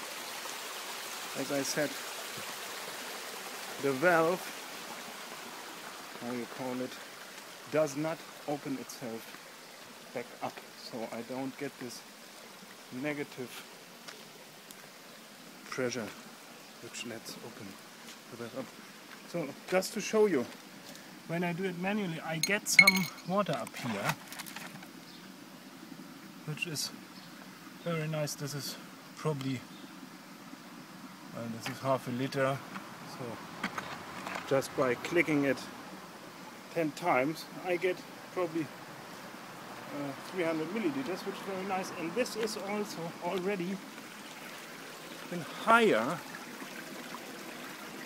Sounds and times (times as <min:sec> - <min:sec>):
Speech: 0:01.4 - 0:02.0, 0:03.8 - 0:04.5, 0:06.2 - 0:07.0, 0:07.7 - 0:09.3, 0:10.2 - 0:12.0, 0:12.9 - 0:13.6, 0:15.7 - 0:16.2, 0:16.8 - 0:18.7, 0:19.3 - 0:20.5, 0:21.3 - 0:24.2, 0:26.5 - 0:27.0, 0:27.8 - 0:29.7, 0:31.4 - 0:33.4, 0:34.5 - 0:35.7, 0:36.7 - 0:38.7, 0:39.9 - 0:43.8, 0:45.3 - 0:46.2.